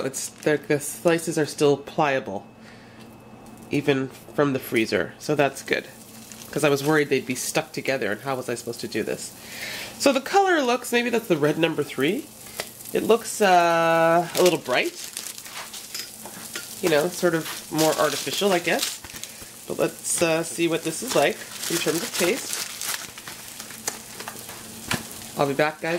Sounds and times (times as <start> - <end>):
Speech: 0.0 - 2.5, 3.7 - 9.3, 10.0 - 12.3, 13.0 - 15.0, 16.8 - 19.0, 19.7 - 22.6, 25.4 - 25.9.